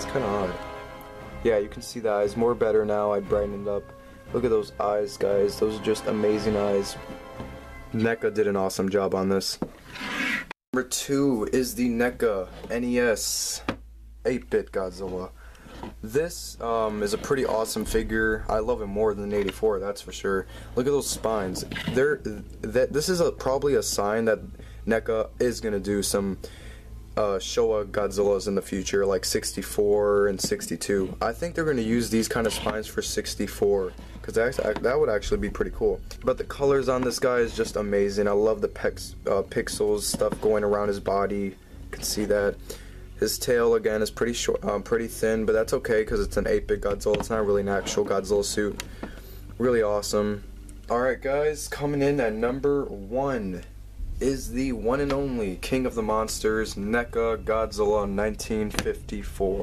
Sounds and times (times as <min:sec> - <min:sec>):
Speech: 0:00.0 - 0:00.7, 0:01.4 - 0:07.0, 0:07.9 - 0:09.6, 0:10.8 - 0:15.4, 0:16.0 - 0:26.4, 0:27.2 - 0:42.6, 0:43.2 - 0:48.8, 0:49.6 - 0:59.6
Inside, small room: 0:00.0 - 0:59.6.